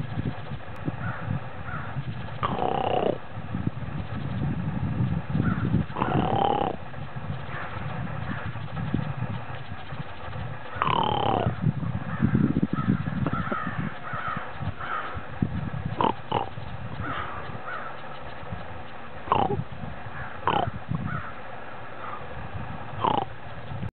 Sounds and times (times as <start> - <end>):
Animal: 0.0 - 3.2, 5.4 - 6.8, 7.4 - 15.2, 15.9 - 19.6, 20.2 - 21.4, 23.0 - 23.6.